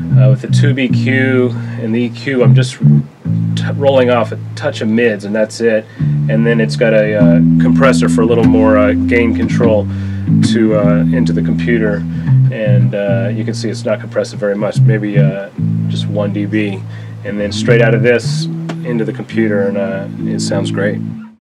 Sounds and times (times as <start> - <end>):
Music: 0.0 - 21.4
Speech: 0.1 - 2.9, 3.6 - 21.0.